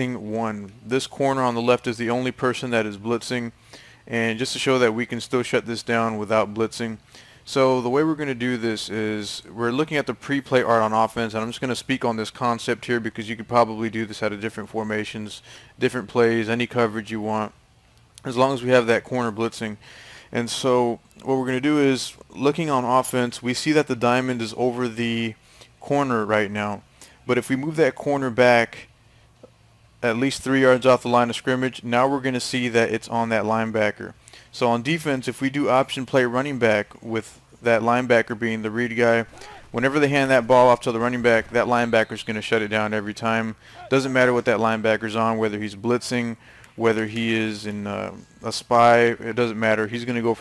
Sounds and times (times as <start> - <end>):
Speech: 0.0 - 17.6, 18.2 - 28.9, 30.0 - 50.4.